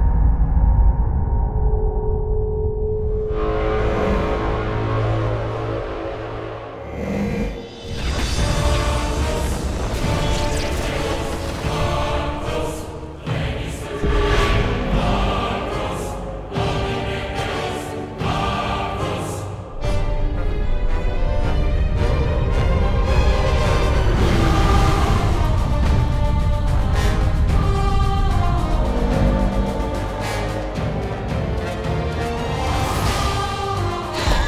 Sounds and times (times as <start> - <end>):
Music: 0.0 - 34.4.